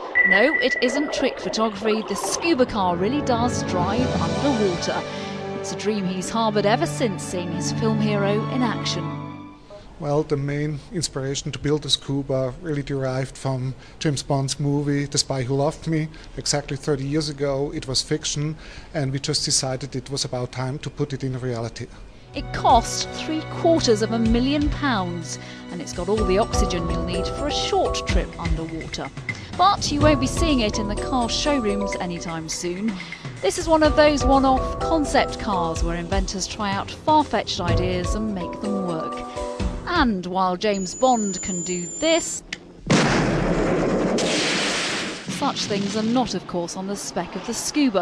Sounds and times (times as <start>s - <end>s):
Speech: 0.3s - 5.1s, 5.7s - 9.1s, 10.0s - 39.2s, 39.9s - 42.4s, 45.4s - 48.0s
Music: 2.4s - 9.7s, 22.3s - 42.0s.